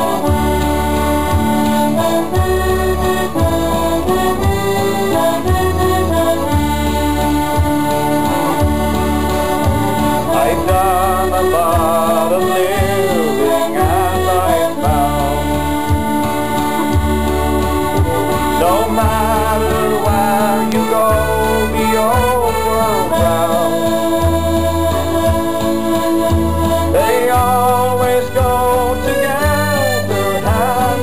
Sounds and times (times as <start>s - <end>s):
Music: 0.0s - 31.0s.